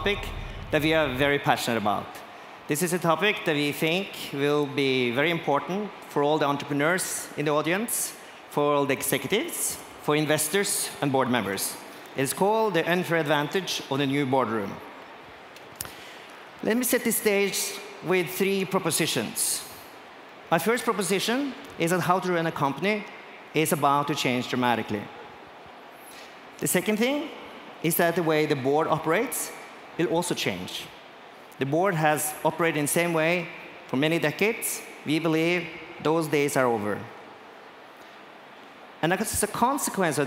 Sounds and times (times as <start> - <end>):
Speech: 0.0 - 14.8, 16.6 - 19.8, 20.5 - 25.2, 26.6 - 30.9, 31.6 - 37.2, 39.0 - 40.2.